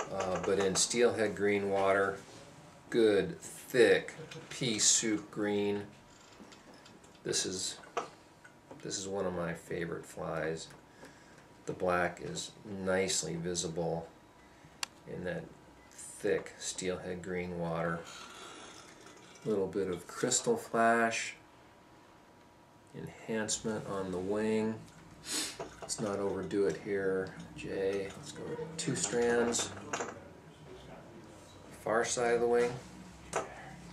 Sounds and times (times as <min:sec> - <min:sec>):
Speech: 0:00.0 - 0:02.2, 0:02.9 - 0:05.9, 0:07.3 - 0:07.8, 0:08.8 - 0:10.7, 0:11.7 - 0:14.1, 0:15.1 - 0:18.1, 0:19.4 - 0:21.4, 0:22.9 - 0:24.8, 0:25.9 - 0:32.9.